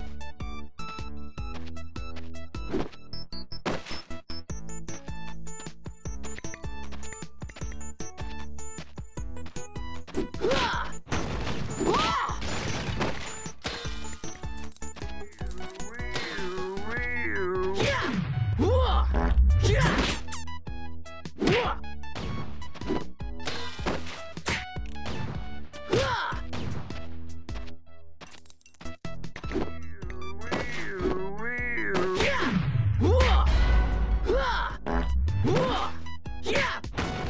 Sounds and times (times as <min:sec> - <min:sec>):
Whack, thwack: 0:10.4 - 0:13.8, 0:17.8 - 0:18.2, 0:21.4 - 0:26.9, 0:32.0 - 0:32.6, 0:35.4 - 0:35.9, 0:36.6 - 0:37.3.